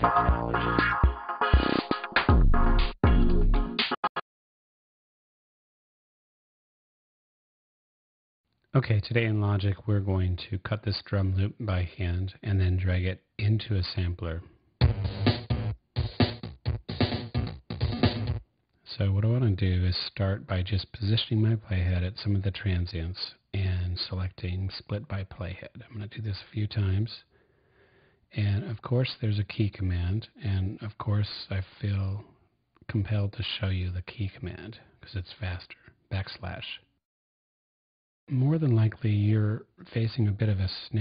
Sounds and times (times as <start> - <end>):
Speech: 8.7 - 14.5, 18.9 - 27.3, 28.3 - 36.9, 38.3 - 41.0.